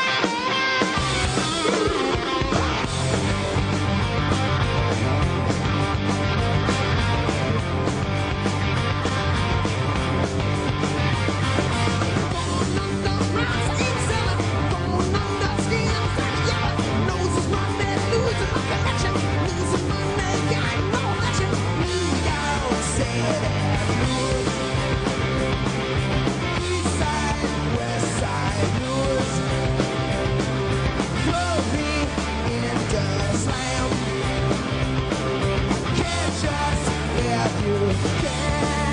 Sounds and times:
Music: 0.0s - 38.9s.

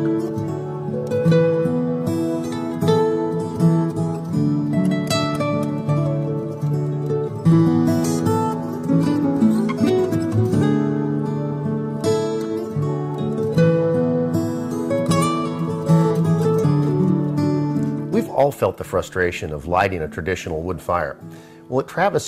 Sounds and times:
Music: 0.0s - 22.2s.

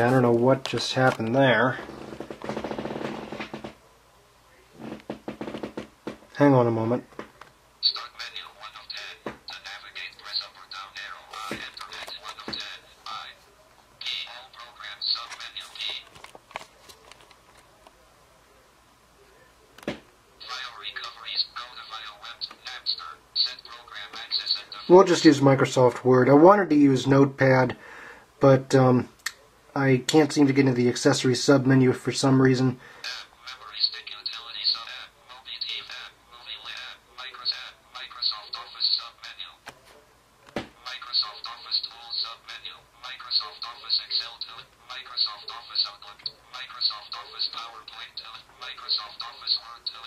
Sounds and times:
Speech: 0.0s - 1.8s, 6.4s - 7.1s, 7.8s - 27.8s, 28.4s - 50.0s.

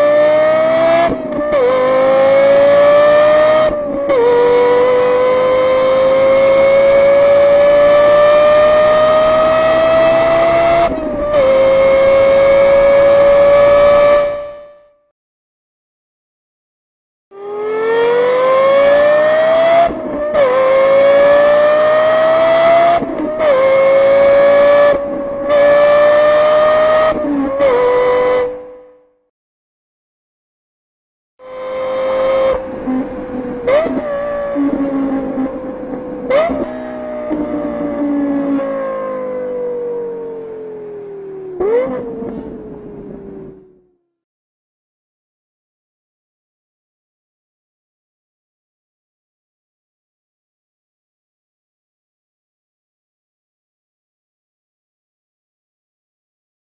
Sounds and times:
Accelerating, revving, vroom: 0.0s - 14.8s, 17.4s - 29.0s, 31.4s - 43.6s
Car: 0.0s - 15.0s, 17.3s - 29.2s, 31.4s - 44.2s.

